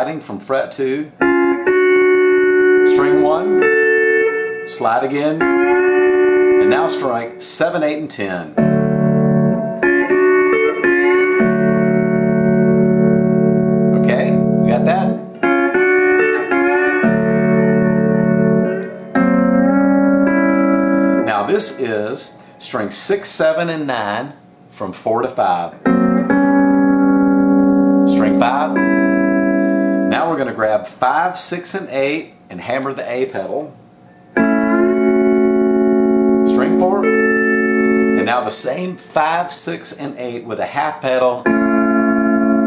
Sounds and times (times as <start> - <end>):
Speech: 0.0 - 1.2, 2.9 - 3.5, 4.7 - 5.5, 6.6 - 8.6, 14.0 - 15.2, 21.2 - 25.8, 28.1 - 28.8, 30.1 - 33.8, 36.5 - 37.1, 38.2 - 41.5
Steel guitar, slide guitar: 1.2 - 7.6, 8.6 - 22.6, 25.8 - 30.2, 34.4 - 38.7, 41.4 - 42.6.